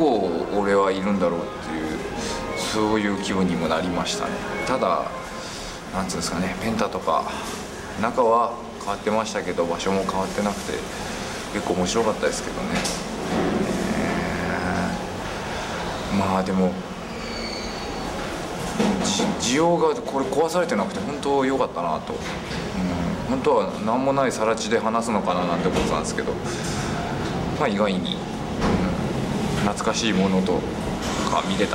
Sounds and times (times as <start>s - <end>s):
Narration, monologue: 0.0s - 17.1s, 18.6s - 31.7s.